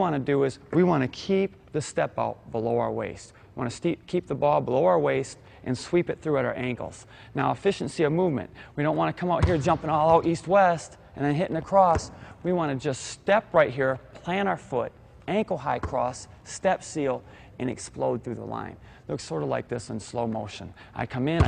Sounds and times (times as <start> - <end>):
Speech: 0.0 - 21.4.